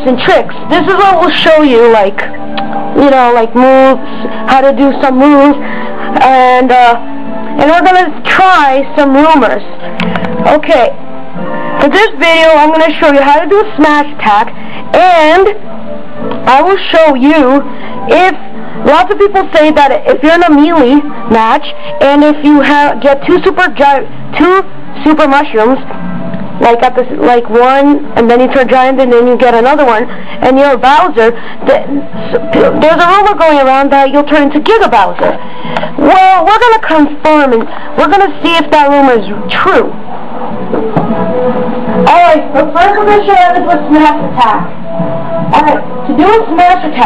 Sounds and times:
Music: 0.0 - 47.0
Speech: 3.0 - 5.6, 6.2 - 7.0, 7.6 - 9.6, 10.4 - 11.0, 11.8 - 15.6, 16.4 - 25.8, 26.6 - 35.4, 36.0 - 39.9, 42.0 - 44.7, 45.5 - 47.0.

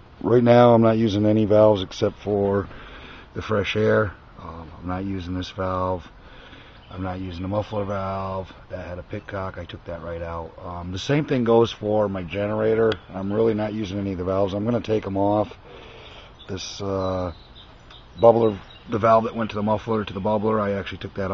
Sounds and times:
Speech: 0.2 - 2.7, 3.4 - 6.1, 6.9 - 15.6, 16.5 - 17.4, 18.2 - 21.3.

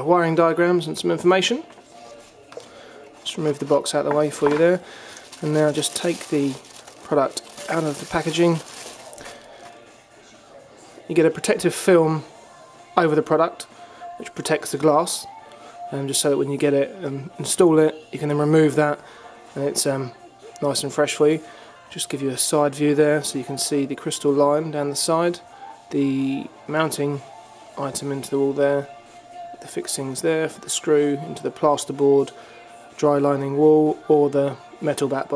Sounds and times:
Speech: 0.0 - 1.7, 3.2 - 4.8, 5.4 - 8.6, 10.6 - 12.3, 13.0 - 15.3, 19.6 - 27.2, 27.8 - 28.9, 29.6 - 32.3, 33.0 - 35.3
Music: 0.0 - 35.3.

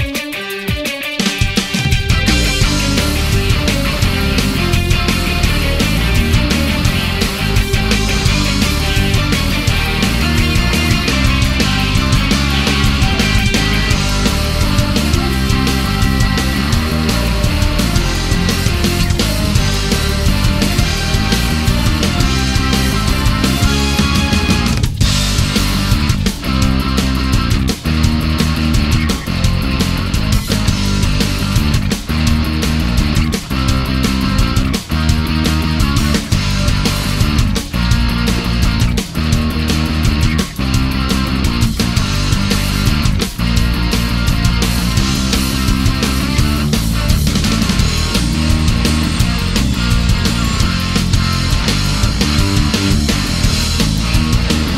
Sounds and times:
Music: 0.0 - 54.7.

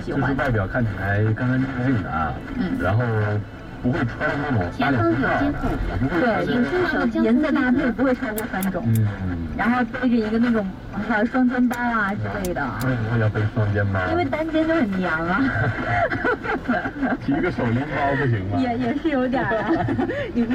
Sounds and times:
Car: 0.0 - 20.5.

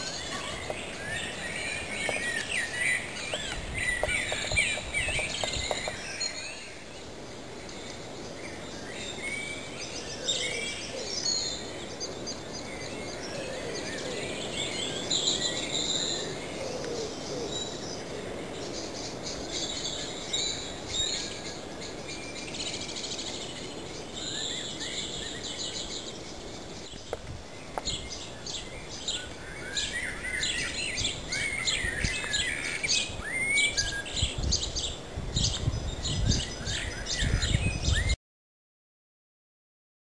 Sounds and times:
Chirp, tweet: 0.0 - 38.2.

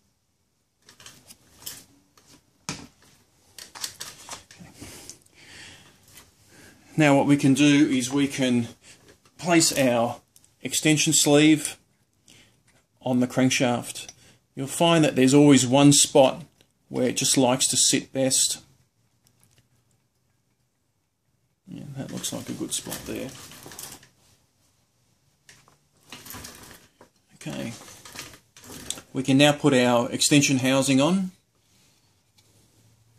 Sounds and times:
Speech: 6.9 - 8.8, 9.4 - 11.9, 13.0 - 18.7, 21.6 - 23.4, 27.3 - 27.9, 29.0 - 31.4.

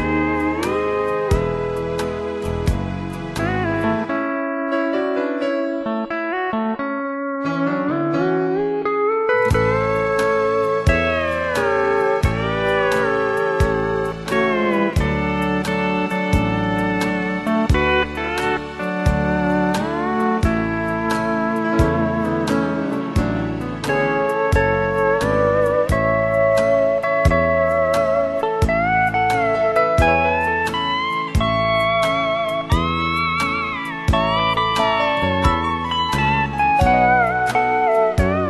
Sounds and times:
Steel guitar, slide guitar: 0.0 - 38.4.

